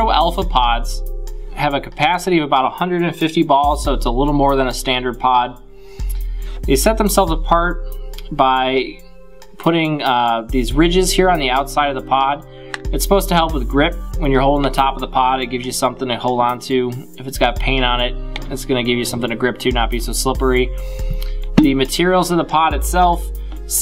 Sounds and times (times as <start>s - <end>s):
Speech: 0.0s - 1.0s, 1.6s - 5.6s, 6.7s - 7.8s, 8.4s - 9.0s, 9.6s - 20.7s, 21.6s - 23.8s.